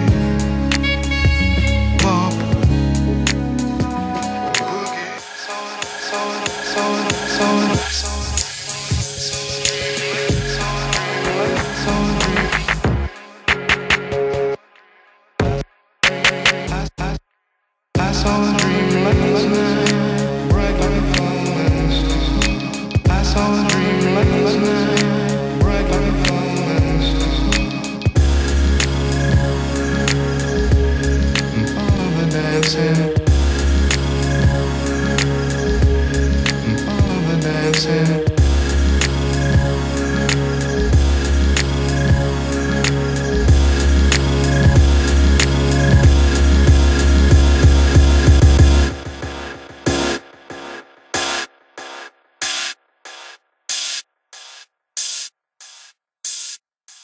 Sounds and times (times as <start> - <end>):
Music: 0.0 - 57.0.